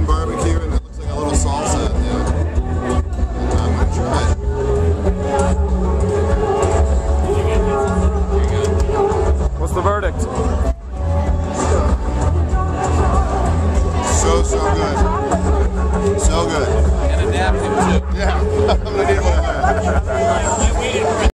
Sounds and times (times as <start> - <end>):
Speech: 0.0 - 2.3, 14.0 - 15.1, 16.2 - 21.3
Music: 0.0 - 21.3.